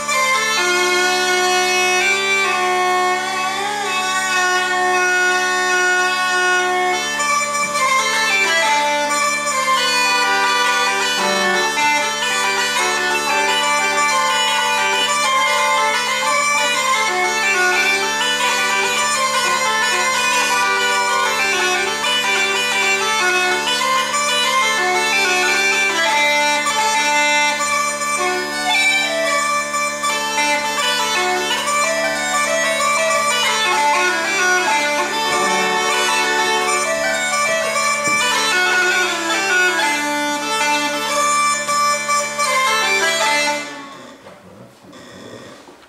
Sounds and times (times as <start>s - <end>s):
Bagpipes: 0.0s - 44.3s
Wind instrument, woodwind instrument: 0.0s - 45.2s.